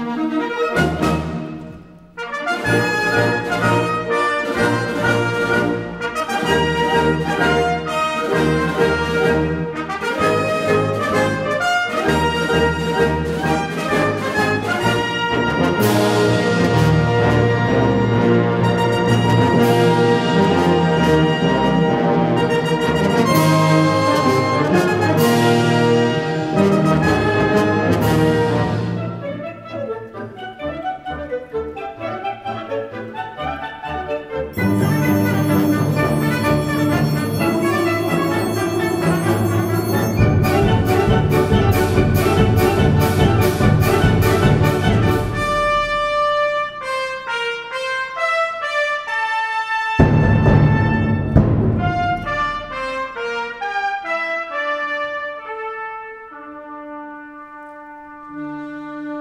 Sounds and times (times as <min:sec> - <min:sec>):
Bowed string instrument: 0:00.0 - 0:59.2
Classical music: 0:00.0 - 0:59.2
French horn: 0:00.0 - 0:59.2
Orchestra: 0:00.0 - 0:59.2.